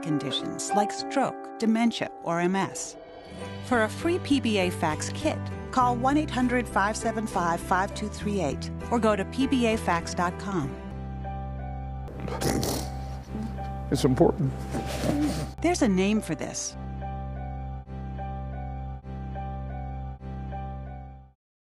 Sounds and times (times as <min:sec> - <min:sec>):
Speech: 0:00.0 - 0:02.9, 0:13.9 - 0:14.5, 0:15.6 - 0:16.7
Music: 0:00.0 - 0:21.4.